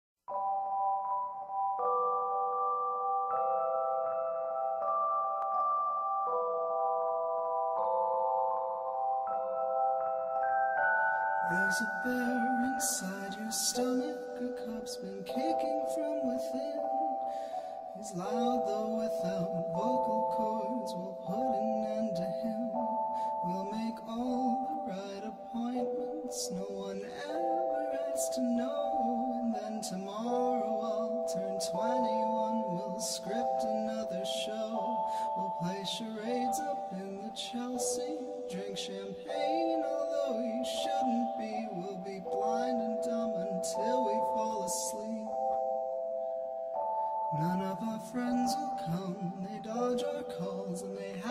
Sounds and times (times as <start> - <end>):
Music: 0.3 - 51.3.